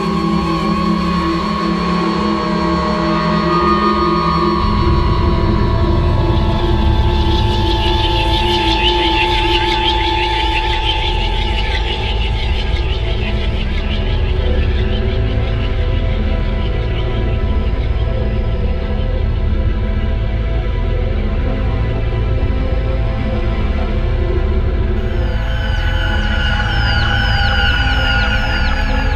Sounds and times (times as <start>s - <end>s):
Music: 0.0s - 29.1s.